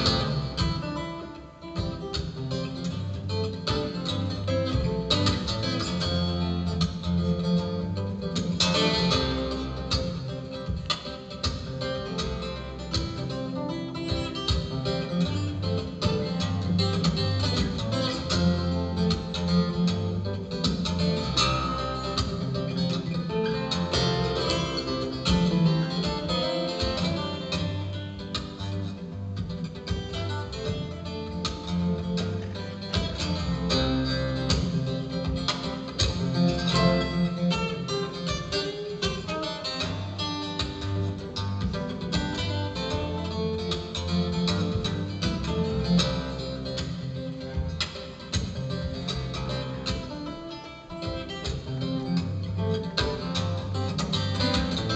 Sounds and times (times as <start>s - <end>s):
Acoustic guitar: 0.0s - 54.9s
Strum: 0.0s - 54.9s.